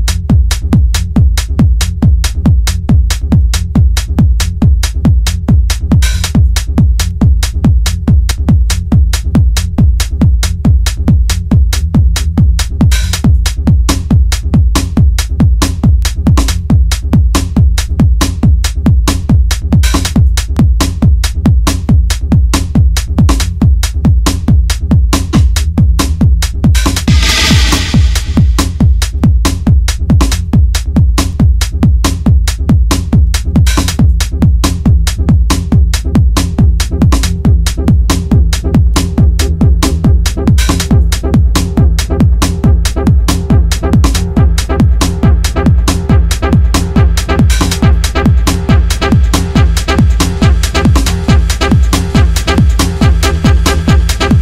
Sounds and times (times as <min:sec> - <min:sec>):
Music: 0:00.0 - 0:54.4.